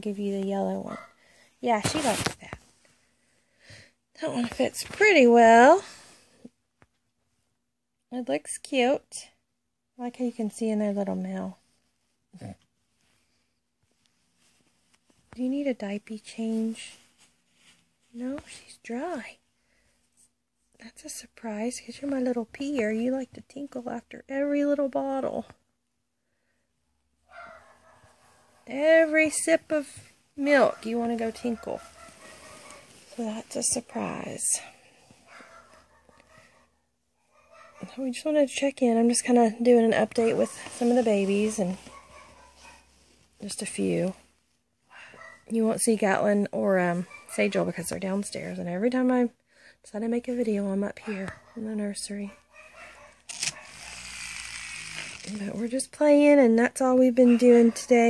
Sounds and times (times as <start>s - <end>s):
Speech: 0.0s - 1.0s, 1.6s - 2.6s, 4.2s - 5.9s, 8.1s - 9.4s, 10.0s - 11.6s, 15.3s - 17.0s, 18.1s - 19.4s, 20.8s - 25.6s, 28.7s - 31.9s, 33.1s - 34.8s, 37.8s - 41.8s, 43.4s - 44.2s, 45.5s - 52.4s, 55.3s - 58.0s
Inside, small room: 0.0s - 58.0s
Dog: 0.9s - 1.2s, 27.3s - 28.7s, 30.7s - 33.0s, 35.2s - 38.0s, 41.8s - 43.0s, 44.9s - 45.5s, 47.0s - 47.6s, 51.0s - 54.0s, 57.2s - 58.0s.